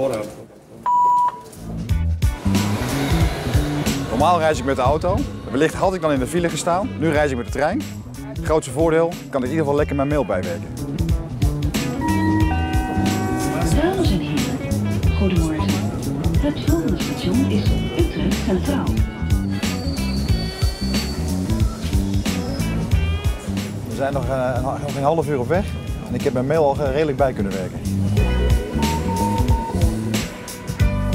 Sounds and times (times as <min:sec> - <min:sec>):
Music: 0:01.2 - 0:31.1.